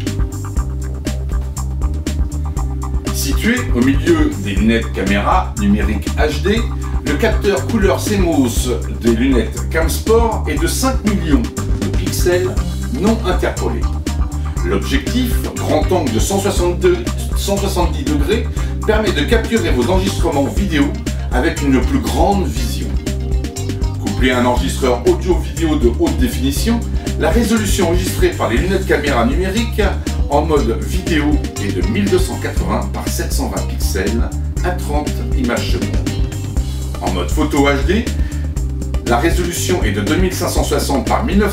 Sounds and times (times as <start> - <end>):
Music: 0.0 - 41.5
Speech: 3.1 - 13.9, 14.6 - 23.0, 24.0 - 38.2, 39.1 - 41.5.